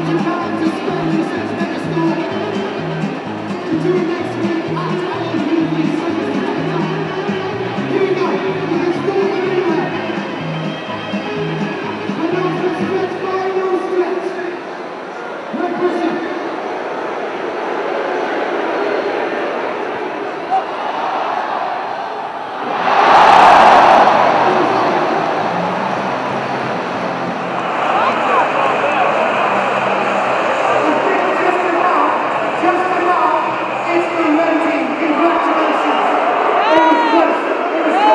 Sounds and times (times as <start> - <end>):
Speech: 0.0 - 10.1, 12.1 - 16.5, 27.8 - 29.4, 30.6 - 38.1
Music: 0.0 - 13.9, 23.0 - 37.1
Inside, public space: 0.0 - 38.1.